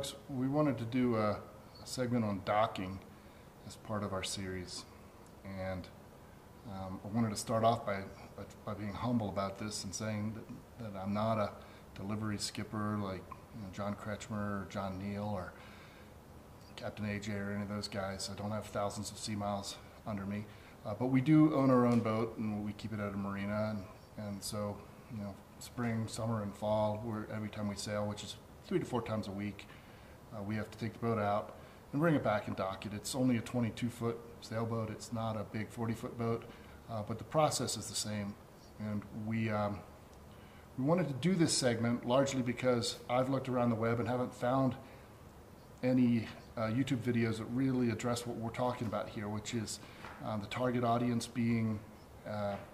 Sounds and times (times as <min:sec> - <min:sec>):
Speech: 0:00.0 - 0:06.0, 0:06.6 - 0:15.6, 0:16.7 - 0:29.7, 0:30.3 - 0:40.0, 0:40.8 - 0:44.9, 0:45.8 - 0:52.7.